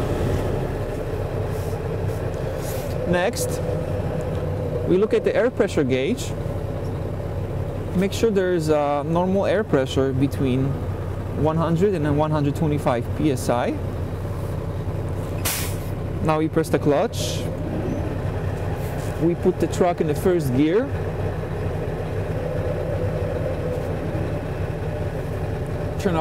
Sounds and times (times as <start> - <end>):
Speech: 3.1 - 3.6, 4.9 - 6.4, 7.9 - 10.8, 11.4 - 13.8, 16.2 - 17.5, 19.2 - 21.0, 26.0 - 26.2.